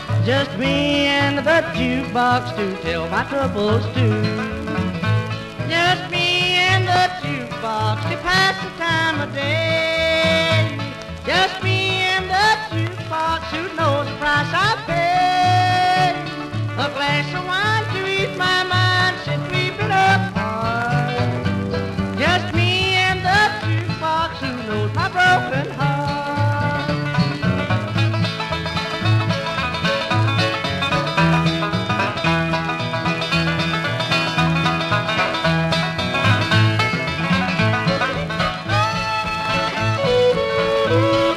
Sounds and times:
Music: 0.0 - 41.3.

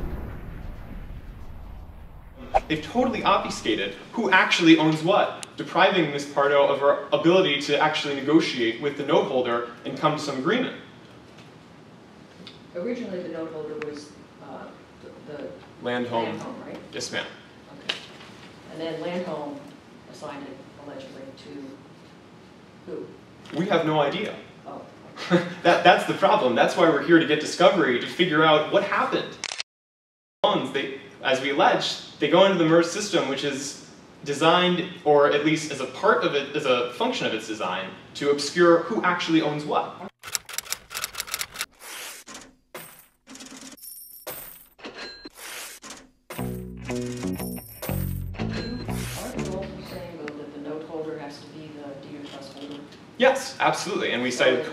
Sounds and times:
Speech: 2.6 - 10.8, 12.8 - 18.0, 18.7 - 21.8, 22.9 - 29.4, 30.5 - 40.1, 49.2 - 54.7.

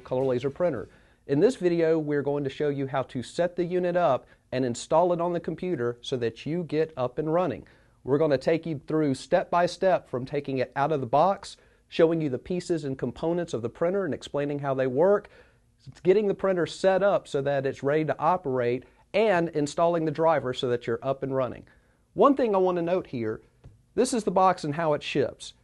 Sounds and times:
Speech: 0.0 - 23.4, 24.0 - 25.6.

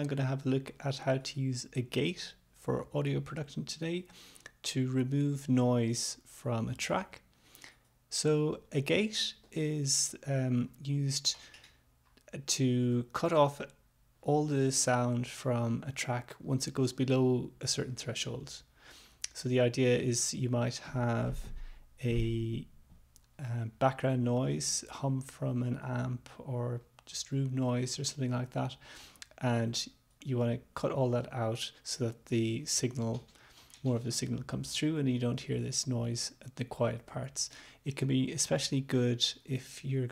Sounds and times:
Speech: 0.0 - 7.3, 8.1 - 11.4, 12.3 - 18.7, 19.3 - 22.7, 23.4 - 40.1.

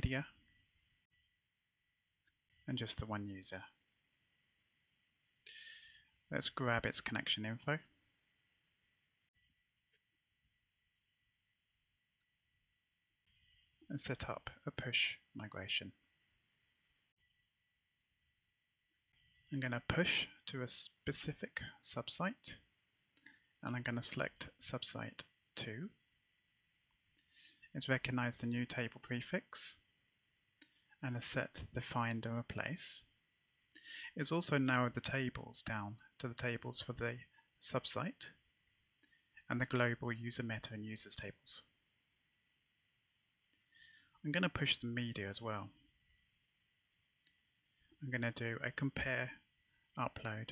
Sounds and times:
Speech: 0.0 - 0.4, 2.7 - 3.8, 6.3 - 8.0, 13.9 - 16.0, 19.5 - 22.7, 23.6 - 26.0, 27.7 - 29.9, 31.0 - 33.2, 33.9 - 38.4, 39.4 - 41.8, 44.2 - 45.8, 48.0 - 50.5.

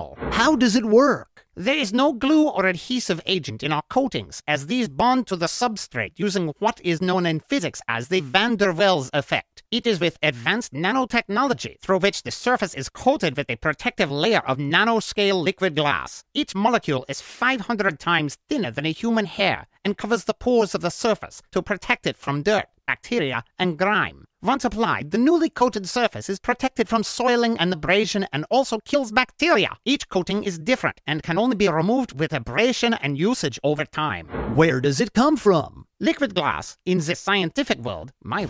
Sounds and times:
Speech: 0.0 - 38.4.

